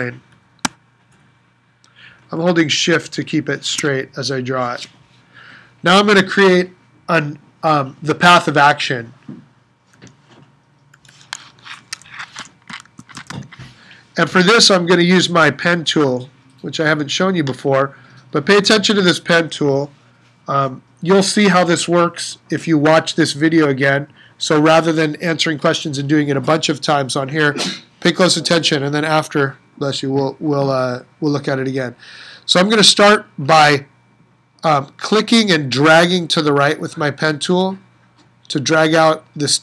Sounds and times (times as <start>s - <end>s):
Speech: 0.0s - 0.2s, 2.3s - 4.9s, 5.8s - 9.2s, 14.2s - 33.9s, 34.6s - 37.9s, 38.5s - 39.6s.